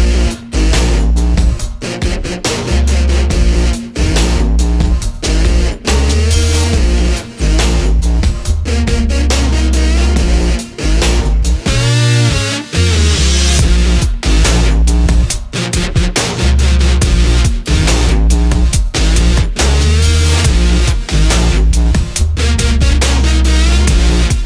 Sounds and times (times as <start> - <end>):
Dubstep: 0.0 - 24.4.